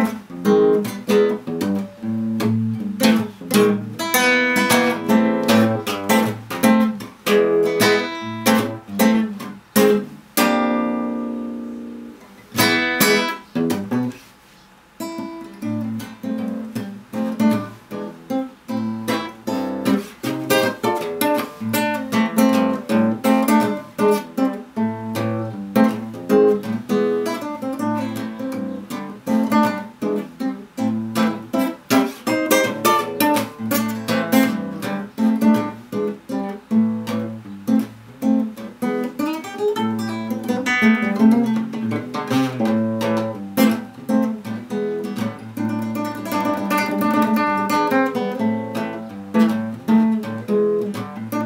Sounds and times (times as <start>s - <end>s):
Guitar: 0.0s - 51.4s.